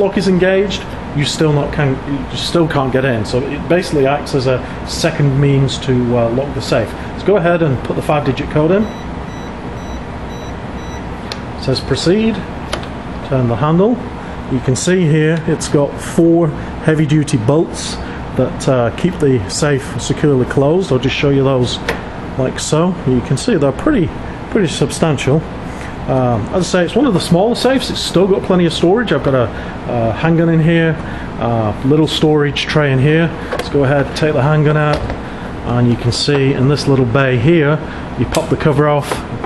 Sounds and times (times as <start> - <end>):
Speech: 0.0 - 8.9, 11.6 - 12.5, 13.2 - 25.5, 26.1 - 35.1, 35.7 - 39.4.